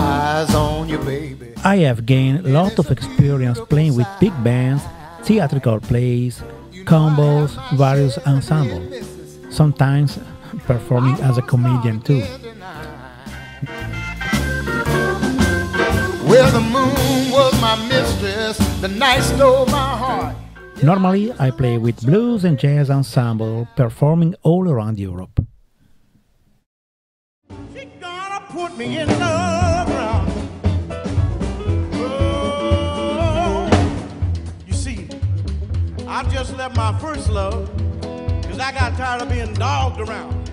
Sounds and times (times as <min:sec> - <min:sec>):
Drum kit: 0:00.0 - 0:22.4, 0:28.8 - 0:40.5
Jazz: 0:00.0 - 0:23.8, 0:27.5 - 0:40.5
Blues: 0:00.0 - 0:24.1, 0:27.5 - 0:40.5
Speech: 0:01.6 - 0:13.2, 0:19.0 - 0:25.4, 0:34.7 - 0:35.1.